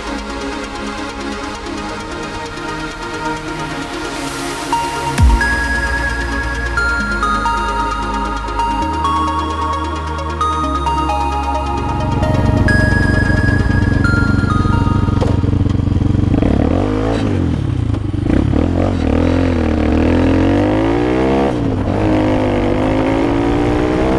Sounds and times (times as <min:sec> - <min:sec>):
Music: 0:00.0 - 0:16.3
Motor vehicle (road): 0:12.3 - 0:24.1.